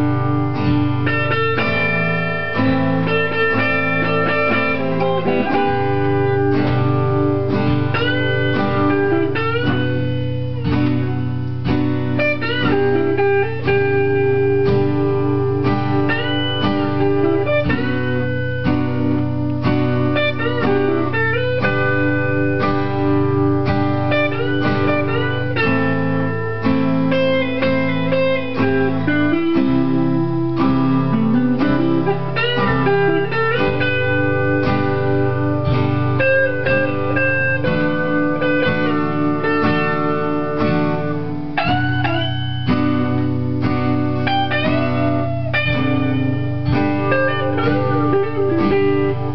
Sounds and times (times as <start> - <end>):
Acoustic guitar: 0.0 - 49.3
Electric guitar: 0.0 - 49.3.